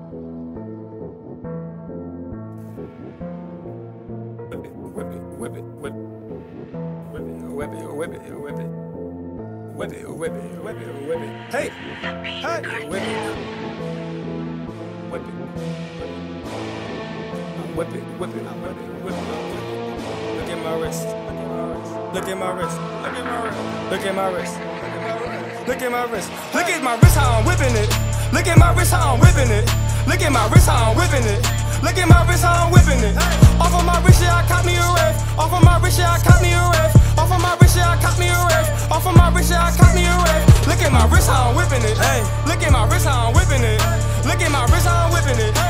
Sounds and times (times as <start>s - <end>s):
Music: 0.0s - 45.6s.